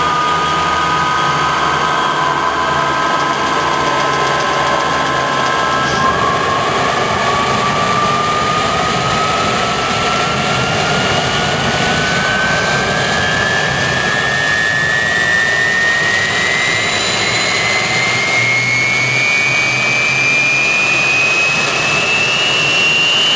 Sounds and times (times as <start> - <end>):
Jet engine: 0.0 - 23.3.